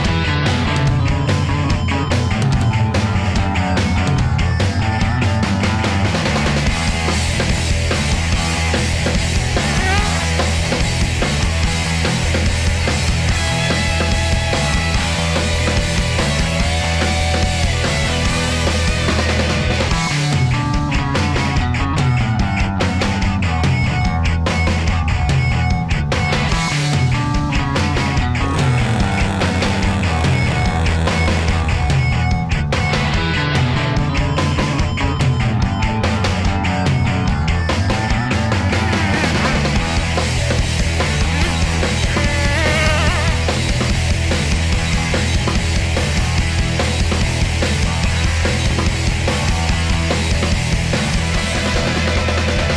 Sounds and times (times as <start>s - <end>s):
Music: 0.0s - 52.7s.